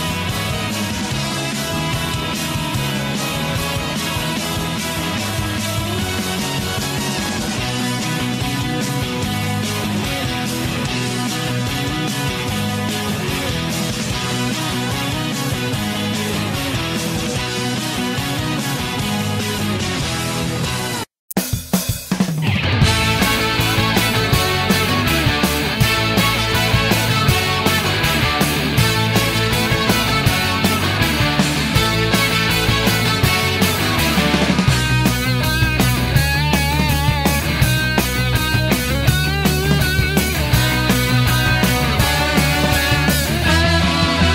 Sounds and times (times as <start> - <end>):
Rock music: 0.0 - 44.3
Theme music: 22.4 - 44.3.